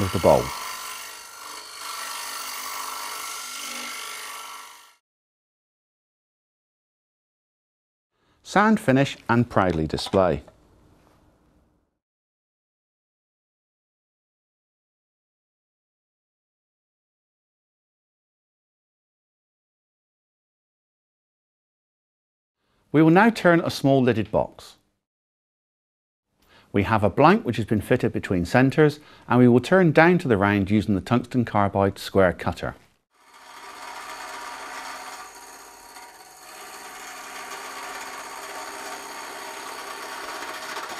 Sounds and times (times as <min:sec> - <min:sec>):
Speech: 0:00.0 - 0:00.5, 0:08.4 - 0:10.5, 0:23.0 - 0:24.8, 0:26.7 - 0:32.8.